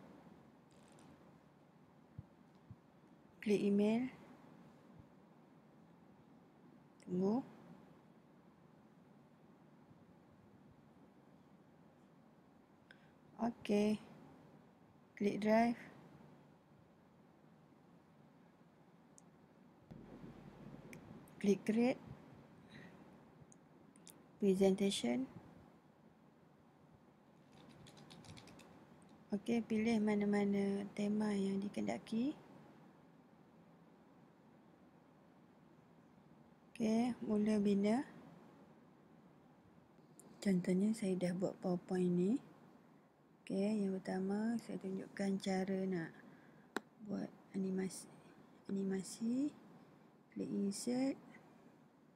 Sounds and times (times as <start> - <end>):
Speech: 3.4 - 4.2, 7.0 - 7.5, 13.4 - 14.1, 15.2 - 16.0, 21.4 - 22.0, 24.4 - 25.4, 29.3 - 32.4, 36.8 - 38.2, 40.4 - 42.5, 43.5 - 46.2, 47.0 - 49.6, 50.4 - 51.2.